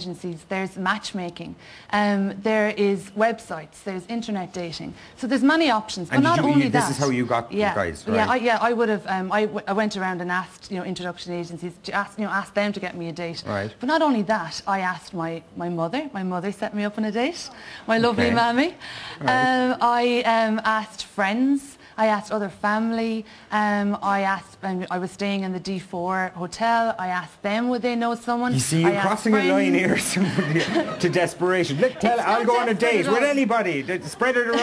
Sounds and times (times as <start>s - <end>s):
Female speech, woman speaking: 0.0s - 30.0s, 32.0s - 33.7s.